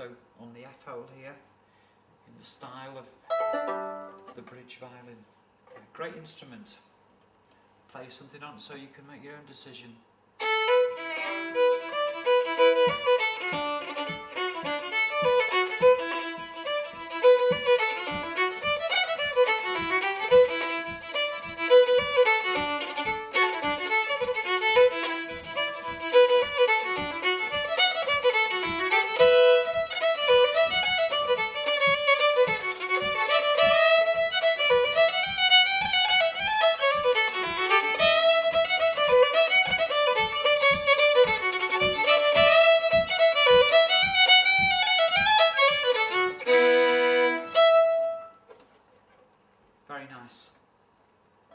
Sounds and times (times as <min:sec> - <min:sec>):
Speech: 0:00.0 - 0:01.5, 0:02.3 - 0:03.2, 0:04.3 - 0:05.3, 0:05.9 - 0:06.9, 0:07.9 - 0:10.0, 0:49.9 - 0:50.6
Violin, fiddle: 0:10.4 - 0:48.4.